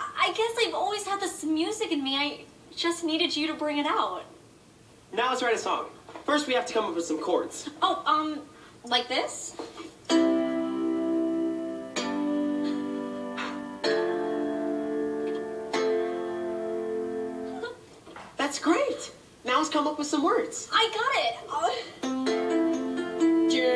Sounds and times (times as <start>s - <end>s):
Music: 10.1s - 17.8s, 22.0s - 23.7s.